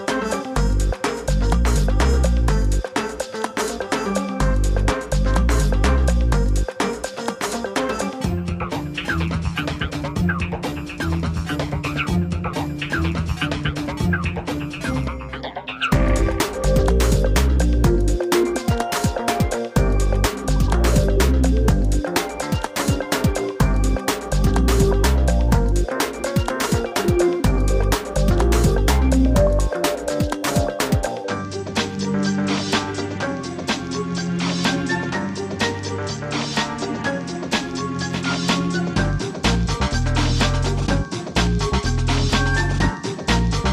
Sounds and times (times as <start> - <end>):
Music: 0.0 - 43.7.